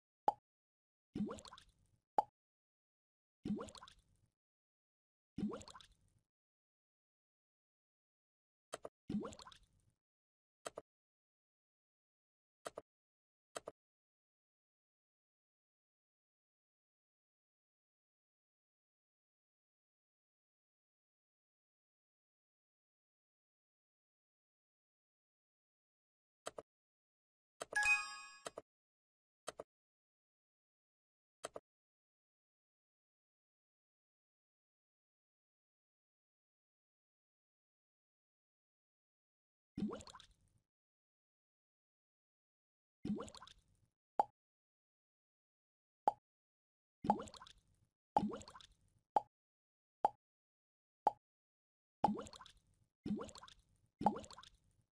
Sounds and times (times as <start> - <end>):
Plop: 1.2 - 2.3, 3.5 - 4.0, 5.4 - 6.0, 39.8 - 40.4, 43.1 - 43.6, 47.0 - 47.6, 48.2 - 49.3, 52.0 - 54.6.